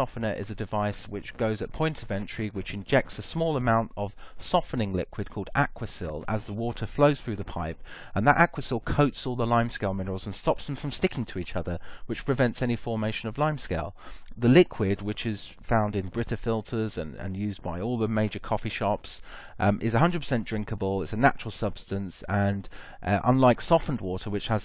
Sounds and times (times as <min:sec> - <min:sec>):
Speech: 0:00.0 - 0:24.6.